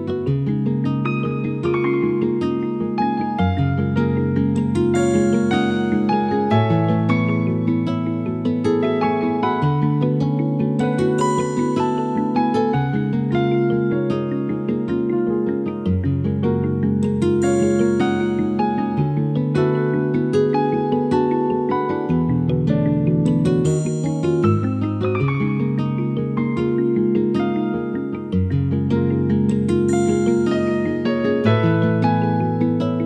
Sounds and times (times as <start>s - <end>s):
Music: 0.0s - 33.0s.